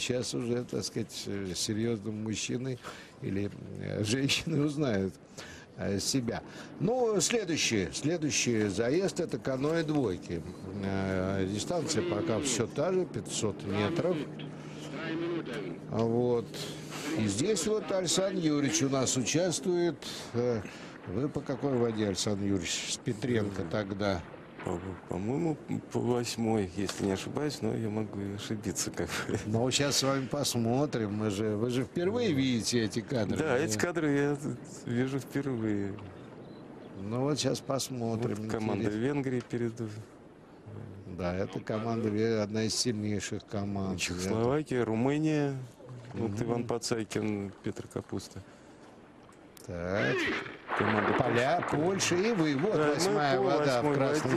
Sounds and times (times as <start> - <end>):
Speech: 0.0 - 5.2, 5.8 - 36.1, 37.0 - 40.1, 40.7 - 48.4, 49.6 - 54.3.